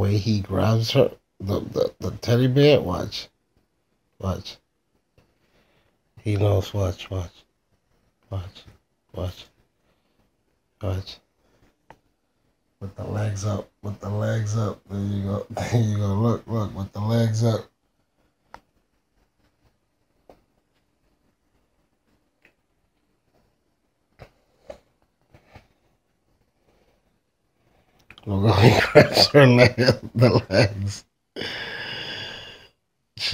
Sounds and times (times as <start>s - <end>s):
Speech: 0.0s - 3.3s, 4.2s - 4.6s, 6.2s - 7.4s, 8.3s - 9.5s, 10.8s - 11.2s, 12.8s - 17.7s, 28.2s - 31.1s.